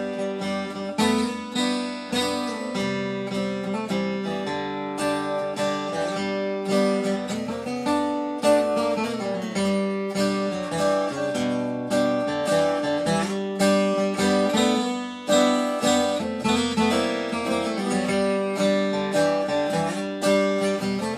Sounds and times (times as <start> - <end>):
Acoustic guitar: 0.0 - 21.1
Strum: 0.0 - 21.1.